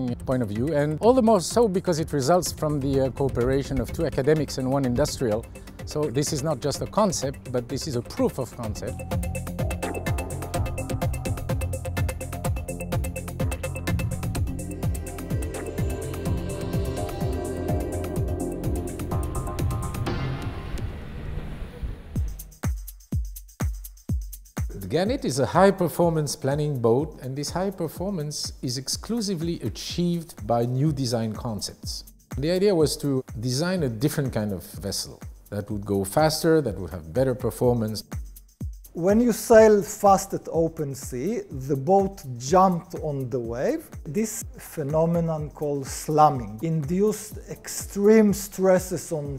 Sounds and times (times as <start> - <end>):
Speech: 0.0 - 9.0, 24.7 - 38.1, 39.0 - 49.3
Music: 0.0 - 49.3.